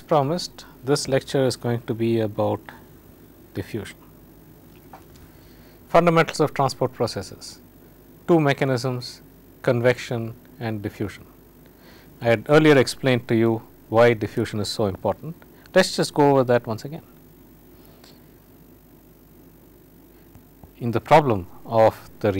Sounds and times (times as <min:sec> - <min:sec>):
Speech: 0:00.0 - 0:02.8, 0:03.5 - 0:04.1, 0:05.9 - 0:07.6, 0:08.3 - 0:11.3, 0:12.2 - 0:17.1, 0:20.8 - 0:22.3.